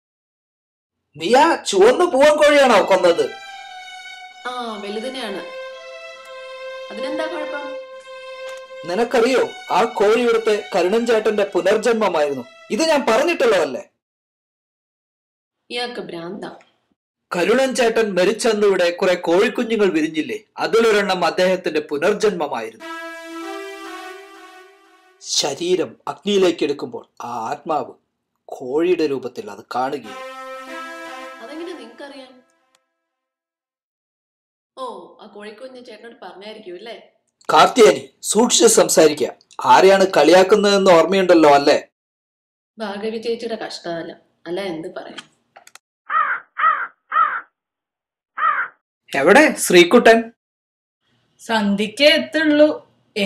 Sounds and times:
Speech: 1.2s - 3.3s, 8.9s - 14.0s, 34.8s - 41.9s, 49.1s - 50.4s.

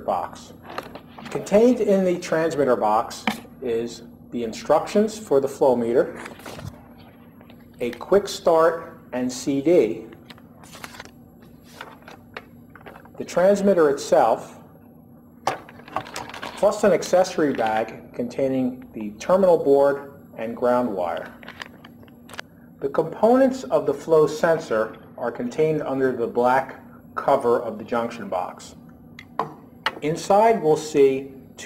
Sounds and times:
Speech: 0.0s - 0.6s, 1.2s - 6.2s, 7.8s - 10.2s, 13.2s - 14.6s, 16.6s - 21.4s, 22.8s - 28.8s, 30.0s - 31.6s
Inside, small room: 0.0s - 31.6s.

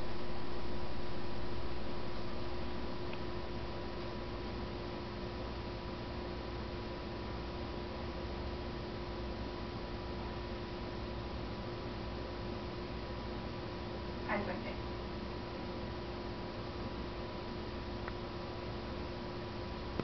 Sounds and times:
Speech: 14.3s - 14.8s.

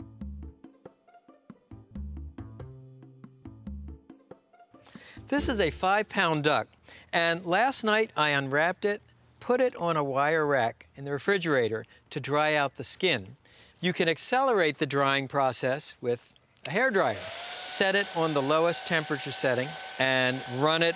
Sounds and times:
Speech: 5.3s - 20.9s.

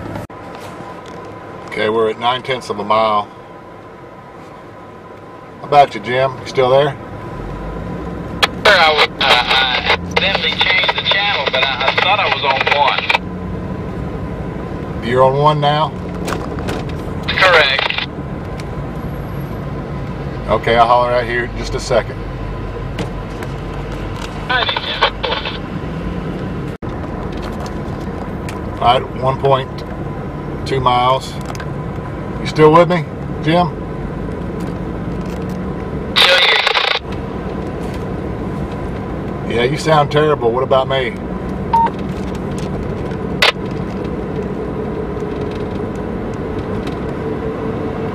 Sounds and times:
Car: 0.0s - 48.1s
Speech: 1.7s - 3.3s, 5.6s - 7.0s, 8.6s - 13.2s, 15.0s - 16.0s, 17.3s - 18.1s, 20.5s - 22.2s, 24.5s - 25.6s, 28.8s - 29.8s, 30.7s - 31.4s, 32.4s - 33.8s, 36.2s - 37.0s, 39.5s - 41.2s
Radio: 8.4s - 13.2s, 17.3s - 18.1s, 24.5s - 25.6s, 36.2s - 37.0s.

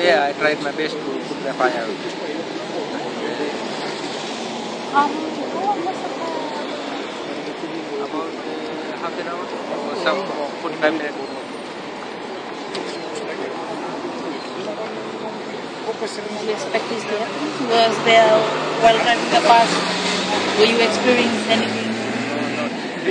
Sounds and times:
Speech: 14.5s - 23.1s.

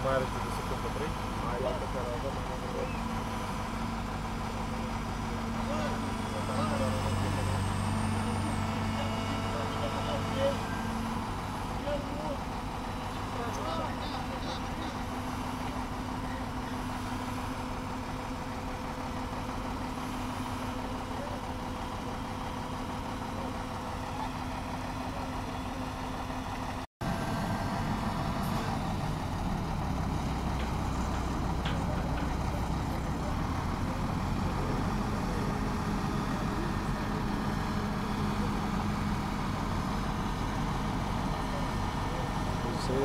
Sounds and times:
Ship: 0.0s - 43.0s.

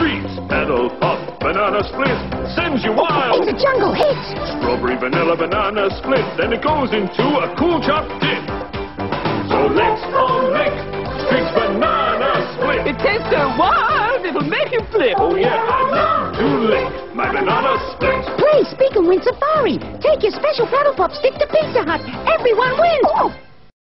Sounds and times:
Music: 0.0s - 23.7s
Speech: 12.9s - 15.6s, 18.4s - 23.3s.

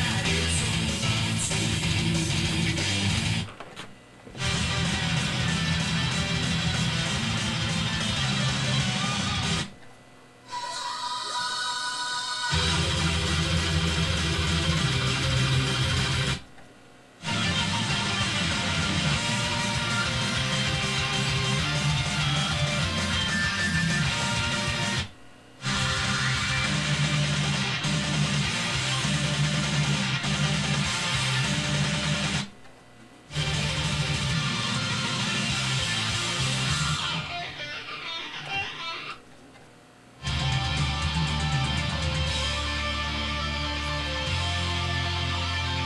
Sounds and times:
Electric guitar: 0.0s - 9.8s, 12.5s - 16.4s, 17.2s - 32.5s, 33.3s - 39.2s, 40.2s - 45.8s.

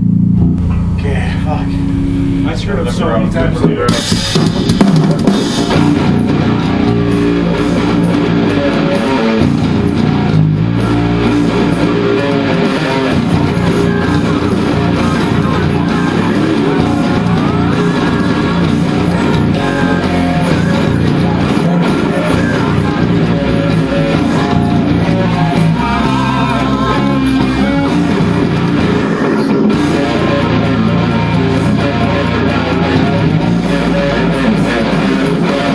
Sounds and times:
Bass guitar: 0.0s - 35.7s
Strum: 0.0s - 35.7s
Acoustic guitar: 3.4s - 35.7s.

